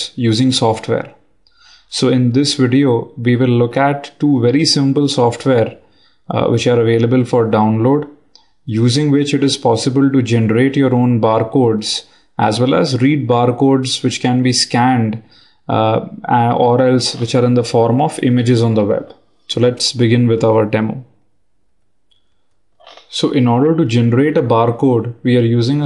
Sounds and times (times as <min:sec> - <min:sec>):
Speech: 0:00.0 - 0:01.2, 0:01.9 - 0:21.2, 0:22.8 - 0:25.8.